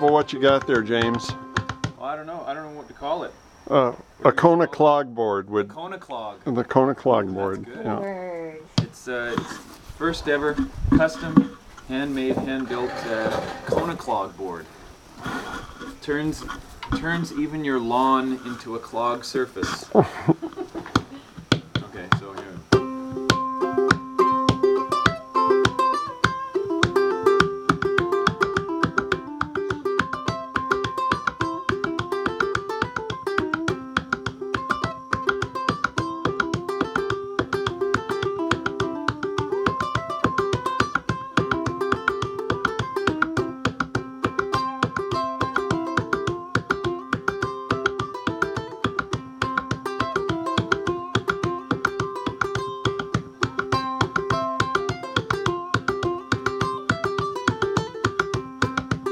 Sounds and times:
Ukulele: 0.0 - 2.0, 15.2 - 59.1.

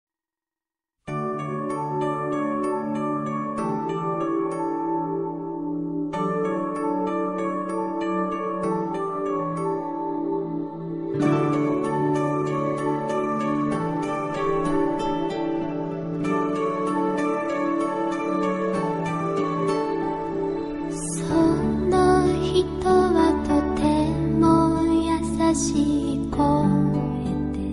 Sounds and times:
Lullaby: 1.1 - 27.7.

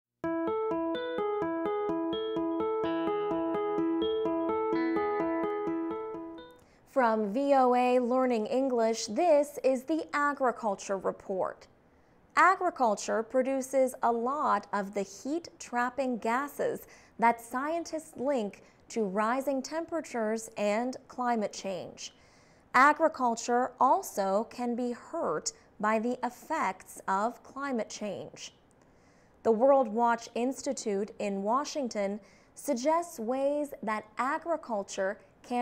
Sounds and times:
Music: 0.2 - 6.6
Speech: 6.9 - 11.7, 12.4 - 22.2, 22.8 - 28.6, 29.5 - 35.6.

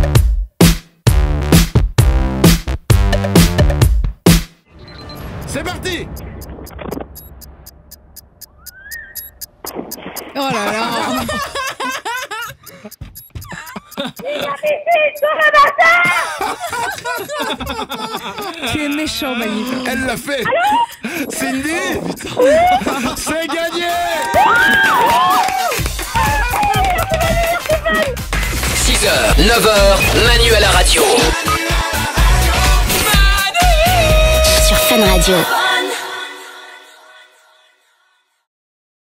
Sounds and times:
Music: 0.0 - 5.1, 24.6 - 38.4
Speech: 5.5 - 6.1, 10.4 - 11.4, 14.2 - 16.2, 18.7 - 24.2, 28.8 - 31.3, 34.6 - 35.5.

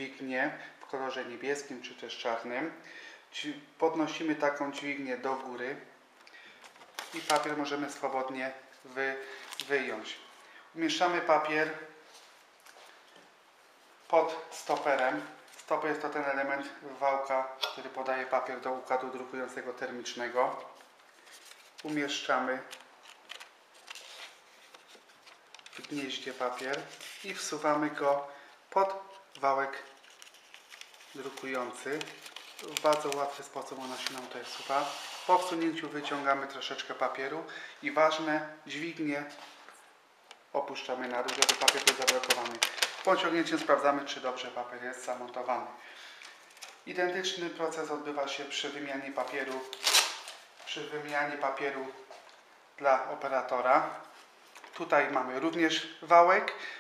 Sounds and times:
Speech: 0.0 - 6.0, 7.1 - 12.0, 14.1 - 20.8, 21.8 - 22.8, 25.8 - 30.0, 31.2 - 39.4, 40.5 - 45.8, 46.8 - 49.8, 50.7 - 52.2, 52.8 - 54.1, 54.7 - 56.8.

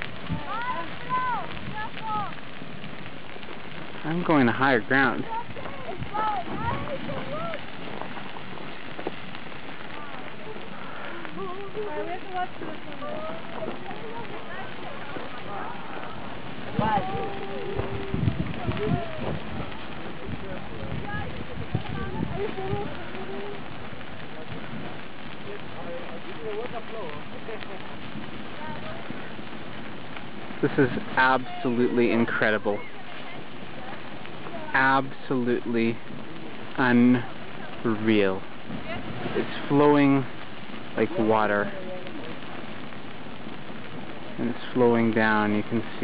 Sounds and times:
Eruption: 0.0 - 46.0.

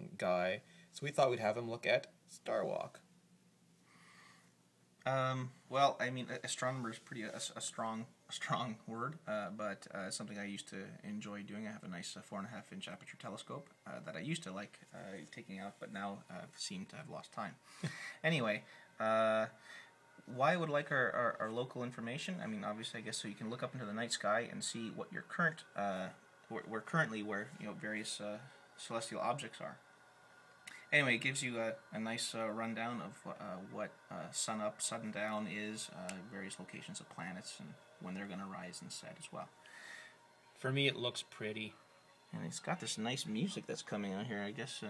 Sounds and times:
Speech: 0.0 - 3.0, 5.0 - 17.6, 18.2 - 19.6, 20.3 - 29.8, 30.8 - 39.5, 40.6 - 44.8.

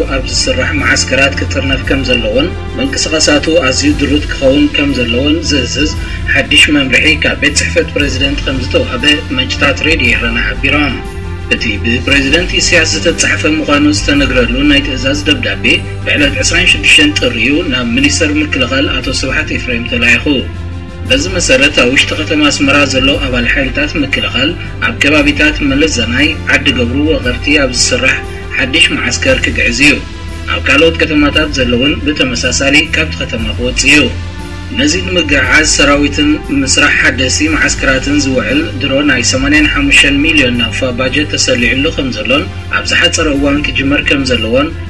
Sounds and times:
Speech: 0.0 - 20.5, 21.1 - 44.8
Music: 0.0 - 44.8.

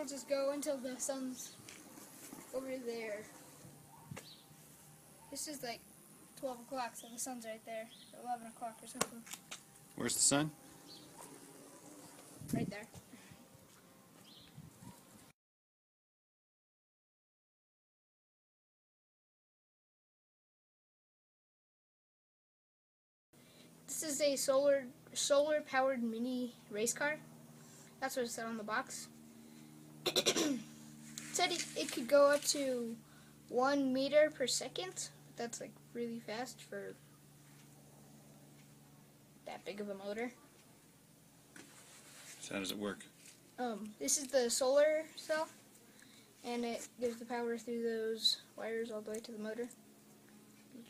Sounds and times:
Child speech, kid speaking: 0.0 - 1.6, 2.5 - 3.4, 5.3 - 5.8, 6.4 - 9.4, 12.4 - 13.0, 23.9 - 27.2, 28.0 - 29.1, 31.3 - 37.0, 39.4 - 40.4, 43.6 - 45.6, 46.4 - 49.8.

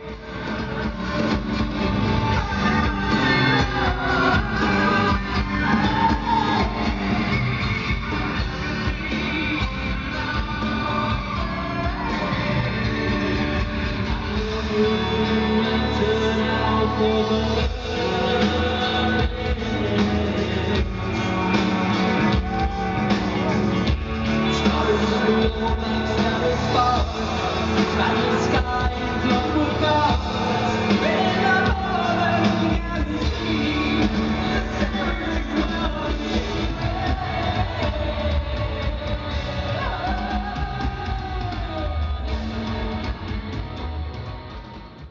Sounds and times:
Drum: 0.0 - 45.1
Drum kit: 0.0 - 45.1.

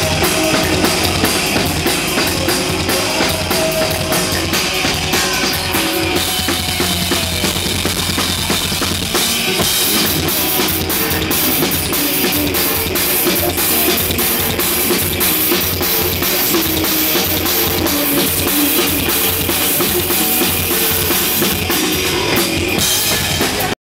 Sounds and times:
Bass drum: 0.0 - 23.8
Drum kit: 0.0 - 23.8.

